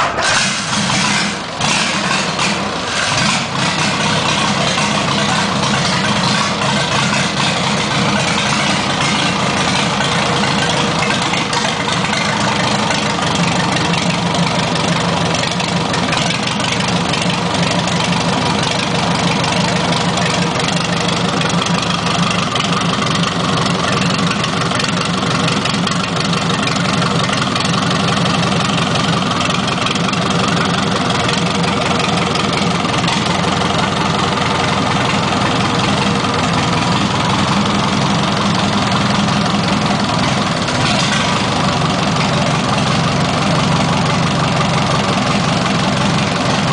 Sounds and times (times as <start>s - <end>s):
Idling: 0.0s - 46.7s.